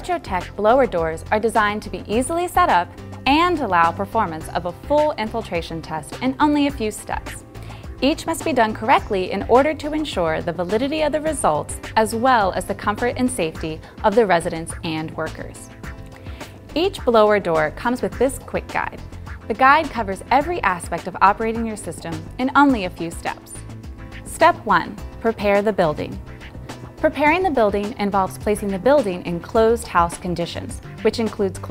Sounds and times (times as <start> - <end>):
Speech: 0.0 - 7.4, 8.0 - 15.7, 16.8 - 23.6, 24.3 - 26.2, 27.0 - 31.7
Music: 0.0 - 31.7.